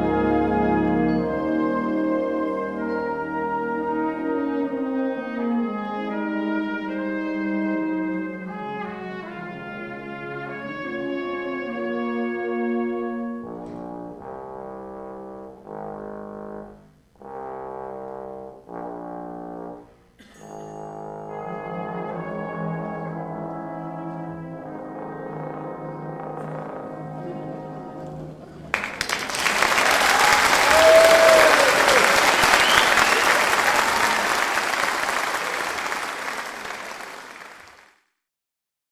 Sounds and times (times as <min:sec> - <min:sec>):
Trombone: 0:00.0 - 0:28.4
Applause: 0:28.7 - 0:38.1.